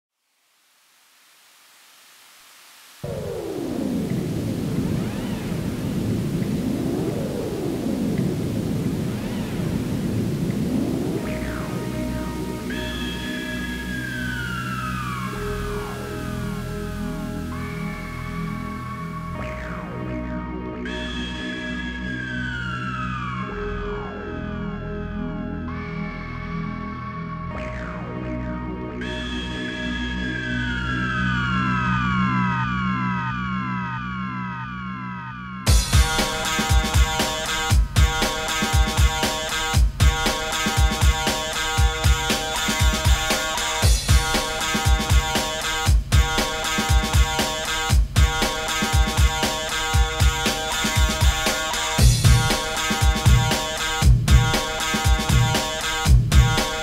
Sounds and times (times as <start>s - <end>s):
Pink noise: 0.2s - 20.1s, 35.7s - 56.8s.